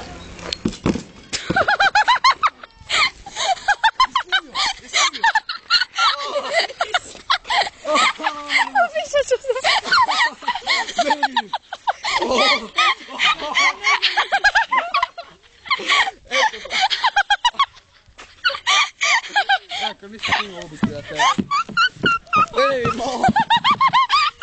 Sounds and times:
Laughter: 1.4s - 24.4s.

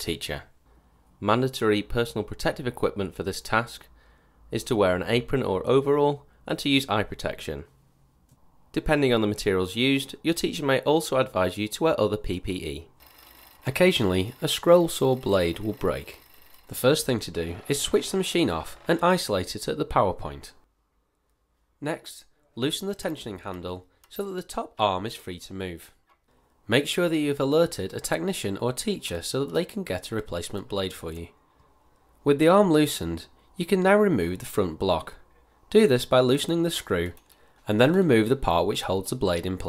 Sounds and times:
Speech: 0.0s - 0.5s, 1.2s - 3.9s, 4.5s - 7.7s, 8.7s - 12.9s, 13.7s - 20.6s, 21.8s - 26.0s, 26.7s - 31.4s, 32.2s - 39.6s.

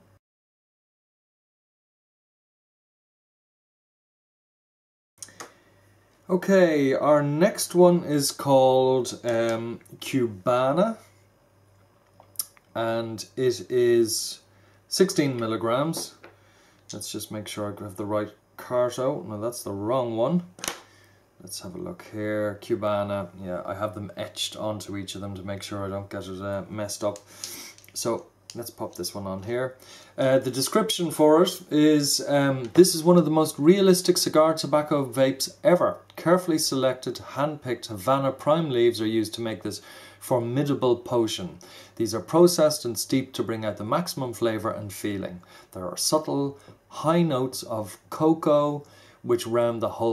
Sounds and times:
Speech: 6.3s - 11.1s, 12.8s - 16.2s, 16.9s - 20.6s, 21.4s - 27.3s, 27.9s - 50.1s.

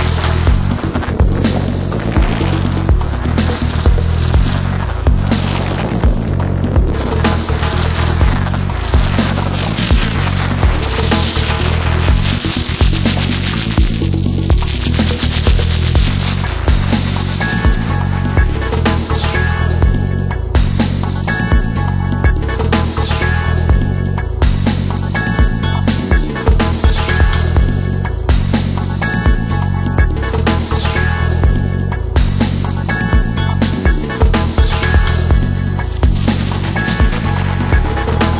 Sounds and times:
Electronic music: 0.0s - 38.3s.

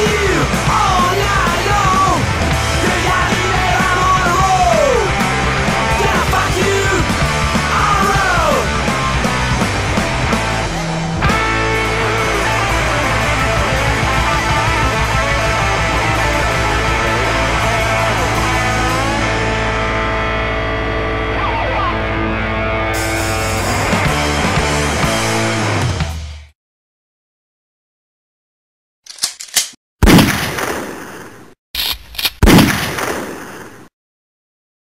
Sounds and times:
Soundtrack music: 0.0s - 26.4s
Rock music: 0.0s - 26.6s
Burst, pop: 30.0s - 31.3s, 32.4s - 33.8s.

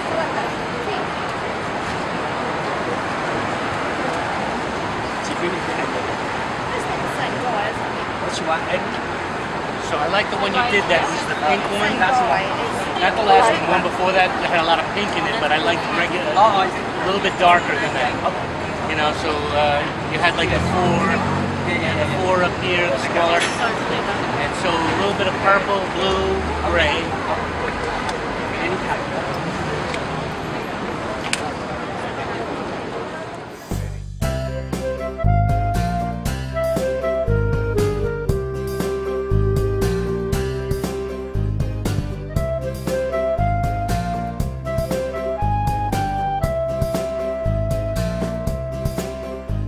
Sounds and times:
Speech: 9.8s - 34.0s
Music: 33.6s - 49.6s.

